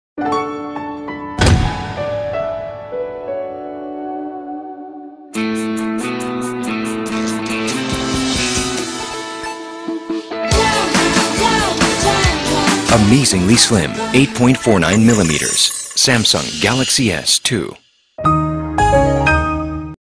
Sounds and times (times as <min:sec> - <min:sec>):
Music: 0:00.2 - 0:17.5, 0:18.1 - 0:20.0
Speech: 0:12.9 - 0:17.8.